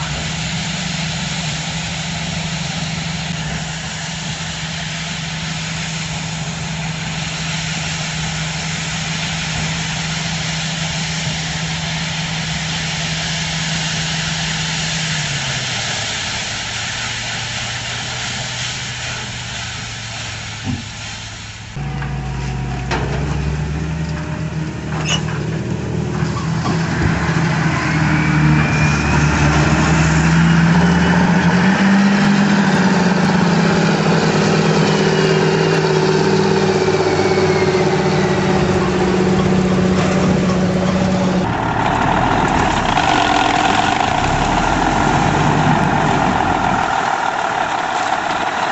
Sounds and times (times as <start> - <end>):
Vehicle: 0.0 - 48.7.